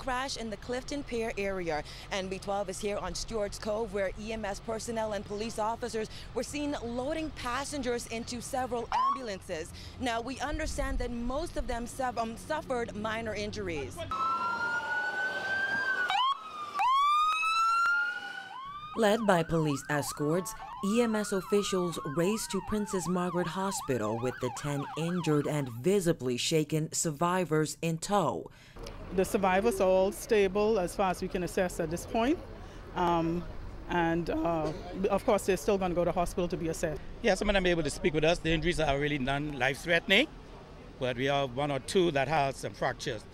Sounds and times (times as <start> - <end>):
Police car (siren): 8.9 - 9.3, 14.1 - 25.8.